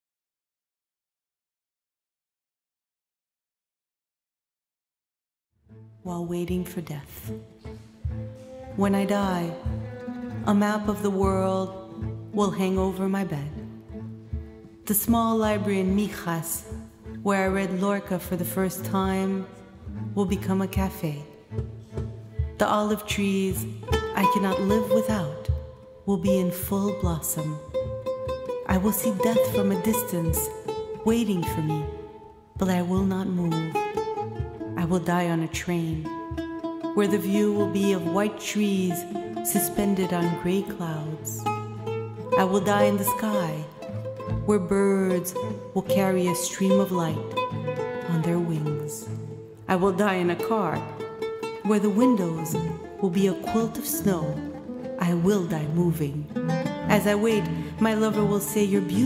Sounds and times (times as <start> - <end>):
Music: 5.6 - 59.0
Speech: 6.0 - 7.4, 8.8 - 9.7, 10.4 - 11.8, 12.4 - 13.7, 14.9 - 19.6, 20.2 - 21.3, 22.6 - 27.6, 28.7 - 31.9, 32.6 - 33.8, 34.8 - 36.1, 37.0 - 41.5, 42.4 - 47.4, 48.1 - 50.9, 51.7 - 54.4, 55.0 - 56.3, 56.9 - 59.0.